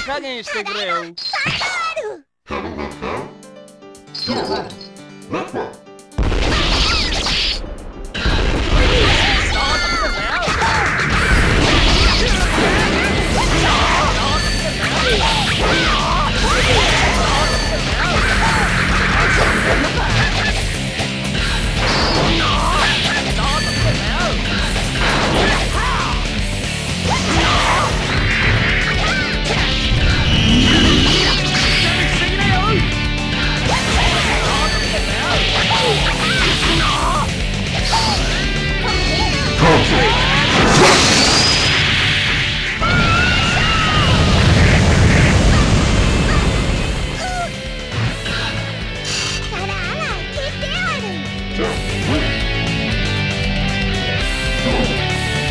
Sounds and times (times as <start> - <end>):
Music: 2.5 - 55.5.